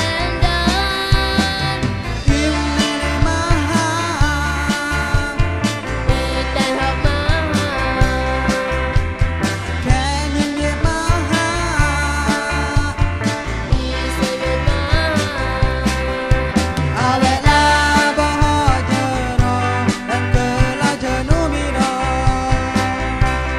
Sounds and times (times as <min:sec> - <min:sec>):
Independent music: 0:00.0 - 0:23.5.